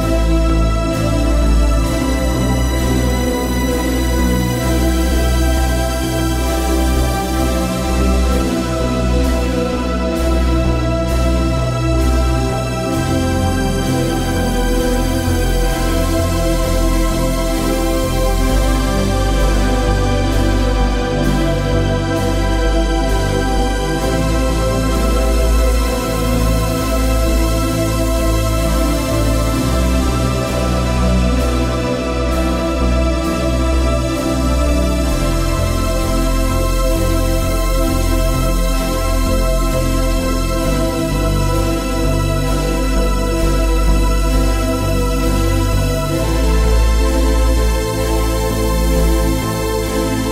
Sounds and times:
Theme music: 0.0s - 50.3s.

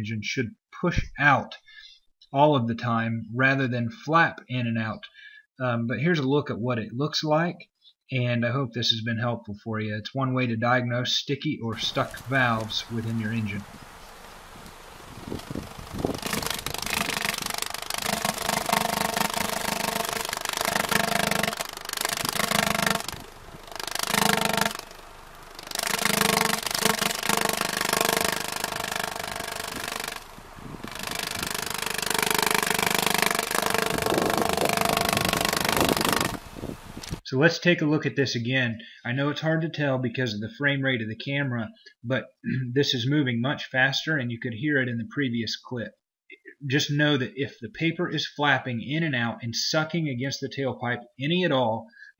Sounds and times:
Engine: 16.1s - 37.2s.

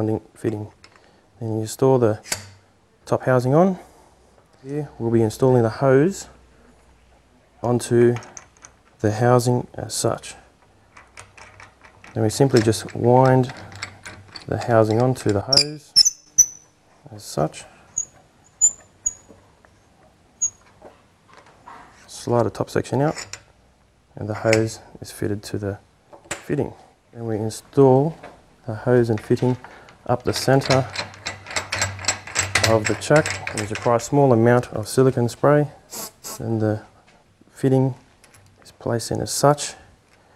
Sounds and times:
Speech: 0.0s - 0.8s, 1.4s - 2.2s, 3.1s - 3.8s, 4.6s - 6.4s, 7.6s - 8.2s, 9.0s - 10.5s, 12.2s - 13.5s, 17.0s - 17.7s, 22.1s - 23.2s, 24.2s - 25.8s, 26.5s - 30.9s, 32.6s - 36.9s, 37.6s - 38.0s, 38.6s - 39.9s
Inside, small room: 0.0s - 40.3s.

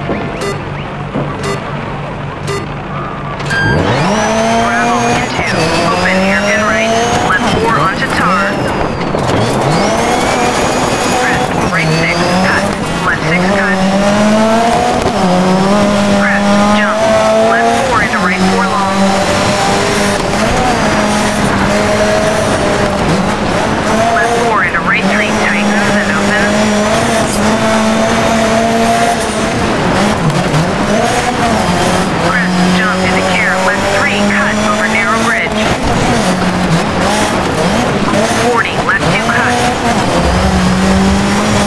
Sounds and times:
Speech: 4.5s - 8.7s, 11.1s - 14.0s, 16.1s - 19.1s, 24.1s - 26.7s, 32.2s - 35.6s, 38.4s - 39.7s.

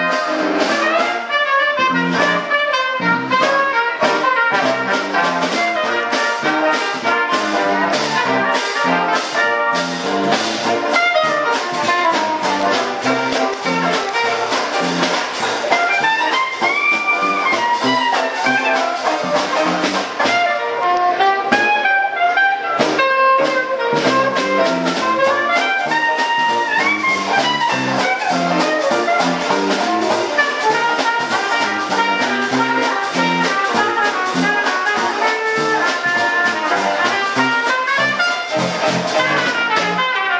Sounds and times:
Music: 0.0s - 40.3s.

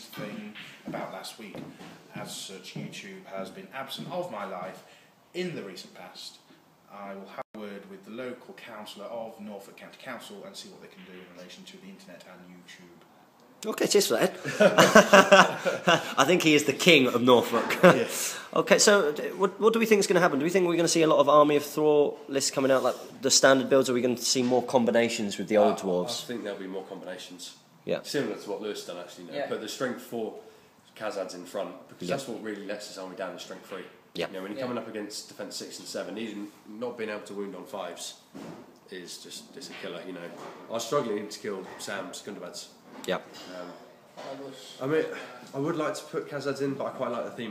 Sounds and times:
Speech: 0.0s - 13.0s, 13.6s - 14.4s, 16.2s - 30.4s, 31.0s - 38.2s, 38.9s - 47.5s
Inside, small room: 0.0s - 47.5s.

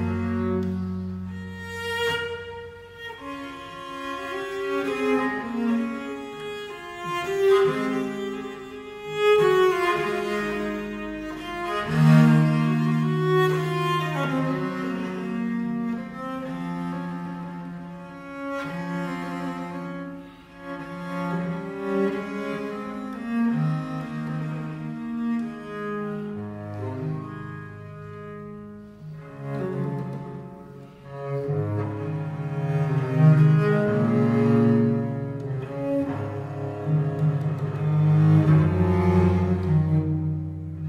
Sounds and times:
Cello: 0.0s - 40.8s.

